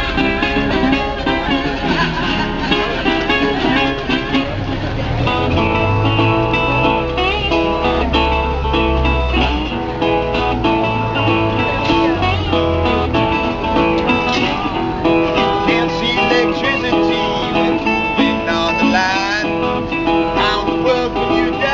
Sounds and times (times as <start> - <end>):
Blues: 0.0 - 21.7
Strum: 0.0 - 21.7.